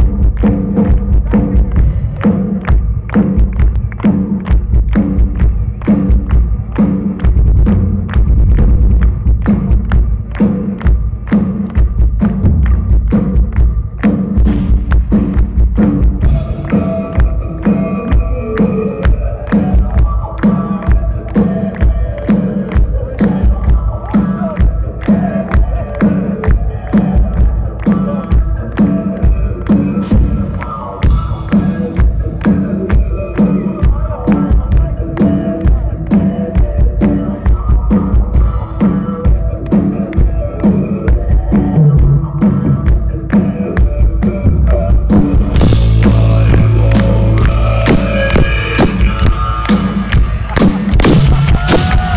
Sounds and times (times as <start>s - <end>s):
Music: 0.0s - 52.1s.